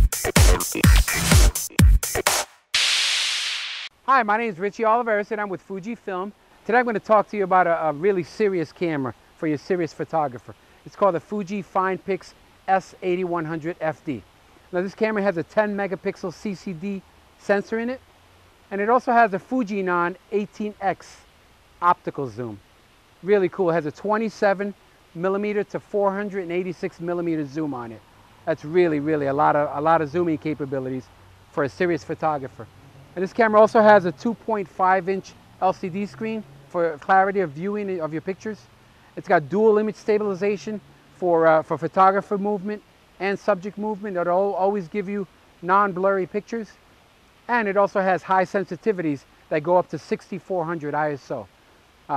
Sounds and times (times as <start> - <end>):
Speech: 4.1 - 18.0, 18.7 - 22.6, 23.2 - 46.8, 47.5 - 51.5.